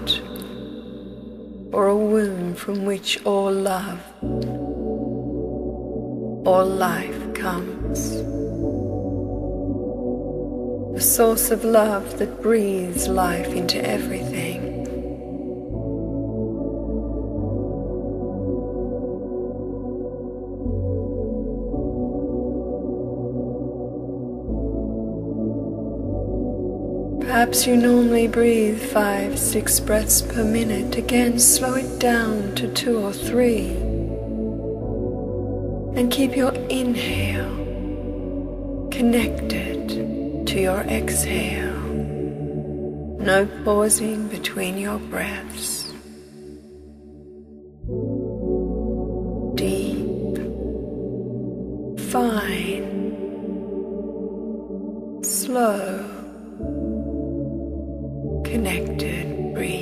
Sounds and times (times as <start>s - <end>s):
Speech: 0.0s - 0.5s, 1.8s - 4.2s, 6.5s - 8.3s, 11.0s - 14.8s, 27.2s - 34.0s, 36.0s - 37.7s, 39.0s - 42.1s, 43.2s - 46.0s, 49.6s - 50.5s, 52.0s - 53.0s, 55.2s - 56.4s, 58.5s - 59.8s
New-age music: 0.0s - 59.8s.